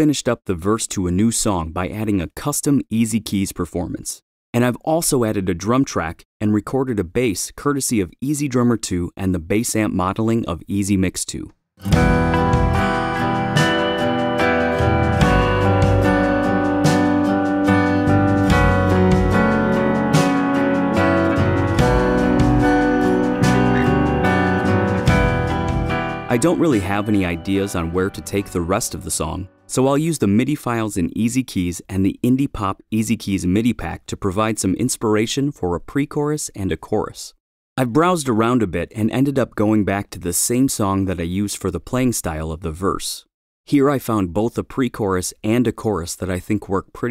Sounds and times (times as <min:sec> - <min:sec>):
Speech: 0:00.0 - 0:11.6, 0:26.3 - 0:47.1.